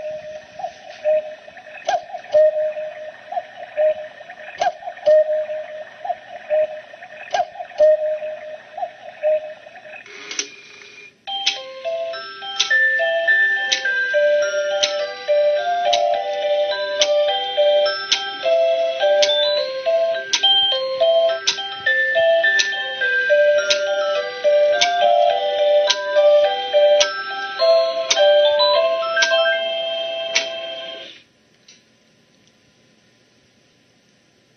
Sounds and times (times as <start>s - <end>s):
Music: 11.3s - 31.2s.